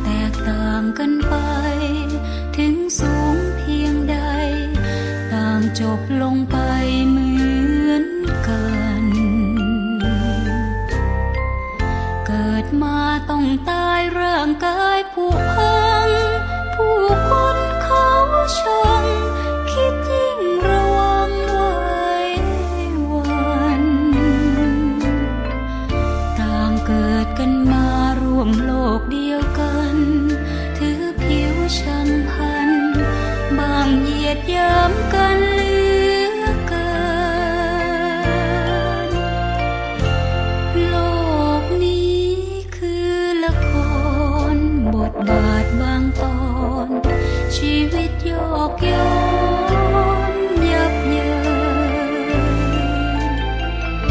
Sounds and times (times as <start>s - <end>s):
Tender music: 0.0s - 54.1s.